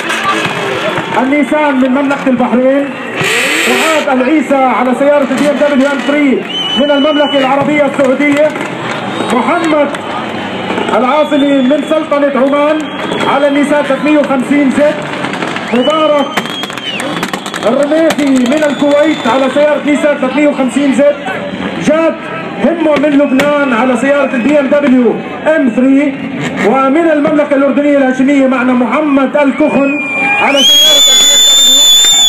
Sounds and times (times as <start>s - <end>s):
Speech: 0.1s - 2.9s, 3.7s - 8.6s, 9.3s - 10.0s, 10.9s - 15.0s, 17.6s - 30.7s.